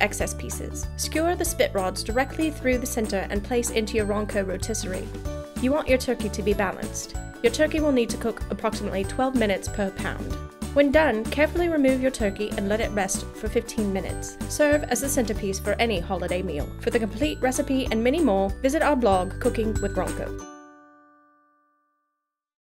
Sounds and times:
Speech: 0:00.0 - 0:20.4
Music: 0:00.0 - 0:22.4.

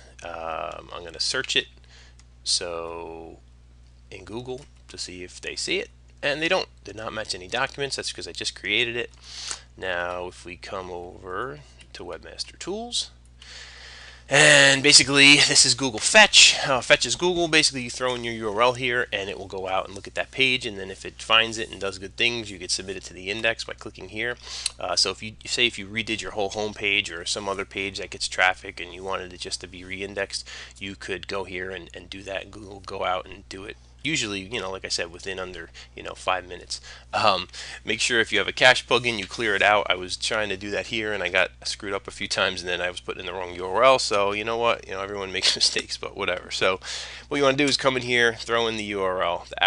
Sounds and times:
Speech: 0:00.2 - 0:01.7, 0:02.4 - 0:03.4, 0:04.1 - 0:09.1, 0:09.8 - 0:13.2, 0:14.3 - 0:49.6.

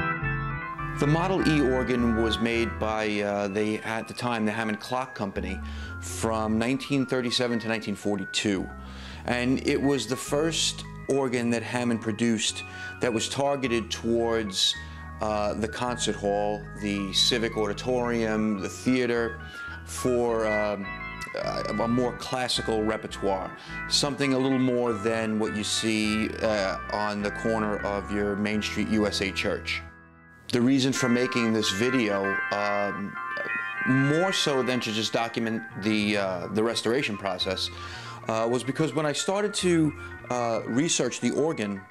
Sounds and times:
Electronic organ: 0:00.0 - 0:41.9
Speech: 0:01.0 - 0:29.8, 0:30.5 - 0:41.9.

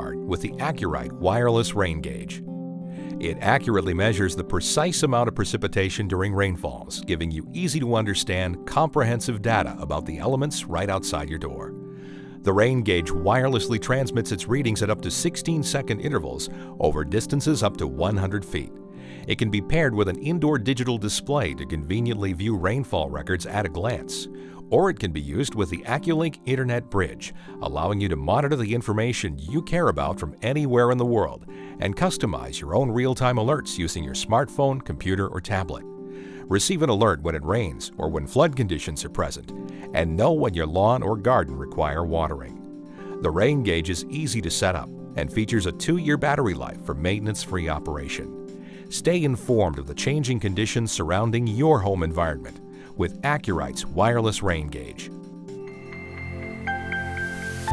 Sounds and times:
Speech: 0:00.0 - 0:02.4, 0:03.2 - 0:11.7, 0:12.4 - 0:18.7, 0:19.3 - 0:35.8, 0:36.5 - 0:42.6, 0:43.2 - 0:48.3, 0:48.9 - 0:55.1
Music: 0:00.0 - 0:57.7.

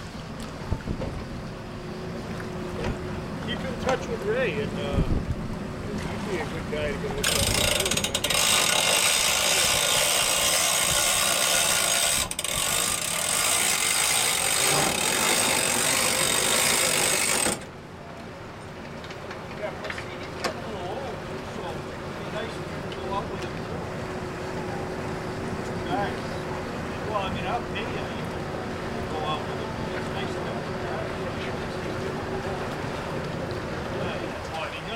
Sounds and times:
Motorboat, speedboat: 0:00.0 - 0:34.9
Speech: 0:03.4 - 0:05.2, 0:05.9 - 0:07.8, 0:19.6 - 0:23.6, 0:25.8 - 0:28.3, 0:29.0 - 0:32.7, 0:34.0 - 0:34.9.

